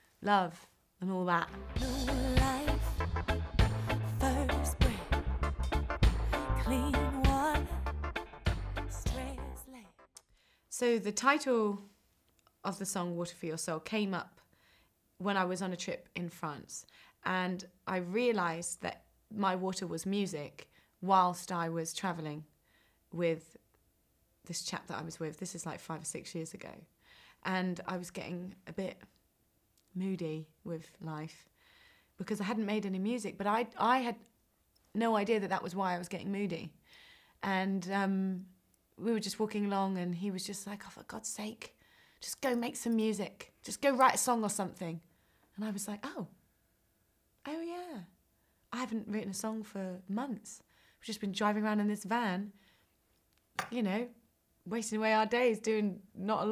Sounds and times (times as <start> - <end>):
Speech: 0.2 - 1.6, 10.7 - 11.9, 12.6 - 14.4, 15.2 - 22.5, 23.2 - 23.6, 24.4 - 29.1, 29.9 - 31.5, 32.2 - 34.2, 34.9 - 36.8, 37.4 - 45.0, 45.6 - 46.4, 47.4 - 52.5, 53.7 - 56.5
Music: 1.5 - 10.1.